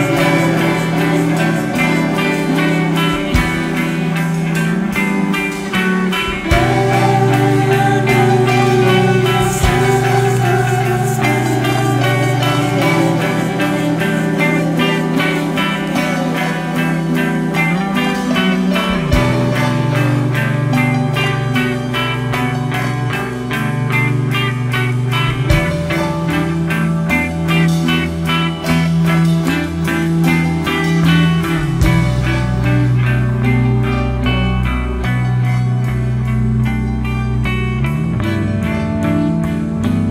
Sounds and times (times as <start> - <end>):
Music: 0.0 - 40.1.